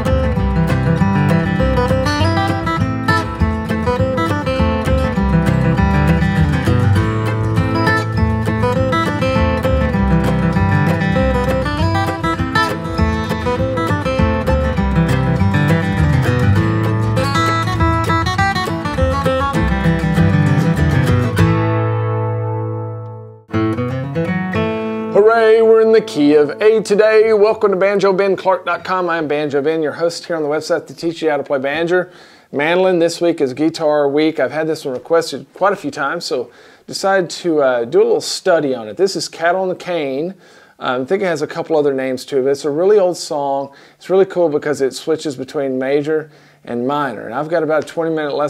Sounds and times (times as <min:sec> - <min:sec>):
Strum: 0:00.0 - 0:27.6
Acoustic guitar: 0:00.0 - 0:30.0.